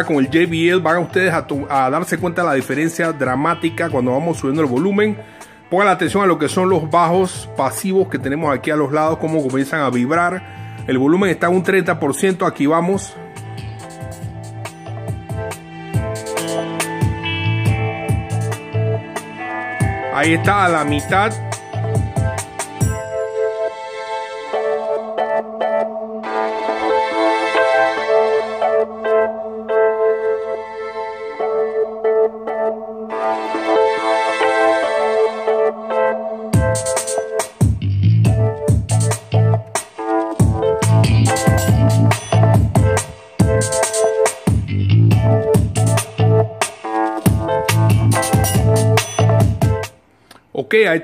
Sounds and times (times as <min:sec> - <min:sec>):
Ambient music: 0:00.0 - 0:50.1.